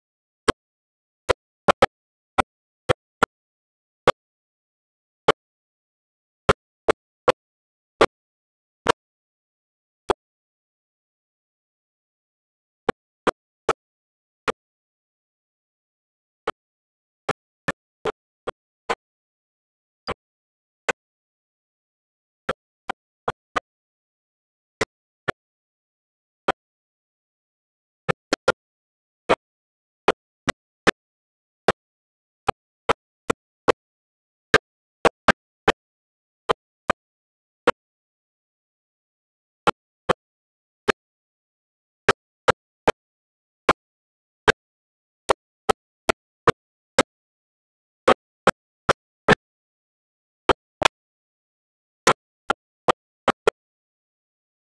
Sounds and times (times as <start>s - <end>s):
Engine: 0.0s - 54.2s.